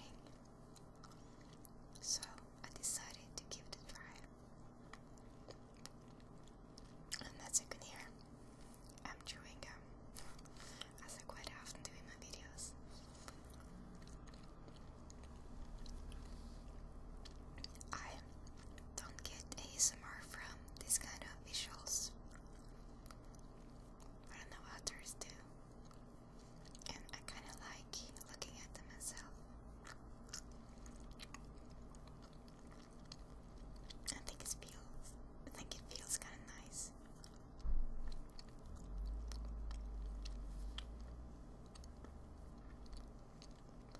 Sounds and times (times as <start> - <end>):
Chewing, mastication: 0.0 - 43.9.